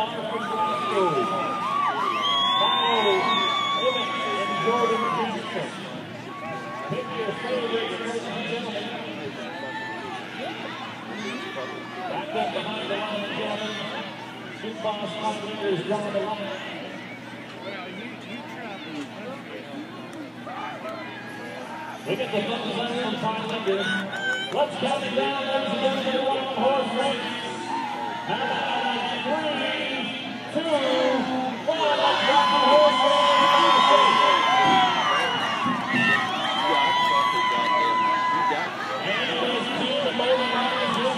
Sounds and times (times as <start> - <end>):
Speech: 17.5 - 27.6, 36.0 - 41.1.